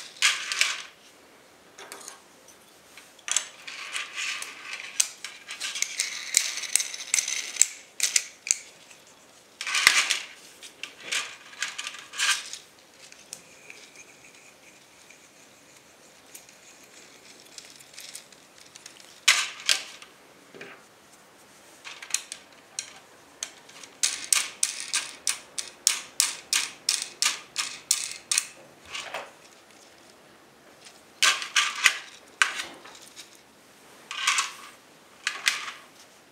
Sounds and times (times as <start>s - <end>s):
Inside, small room: 0.0s - 36.3s.